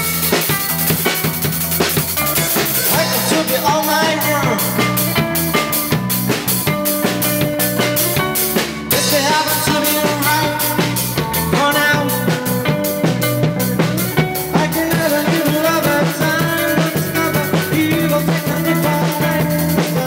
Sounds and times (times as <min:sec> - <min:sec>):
Music: 0:00.0 - 0:20.0.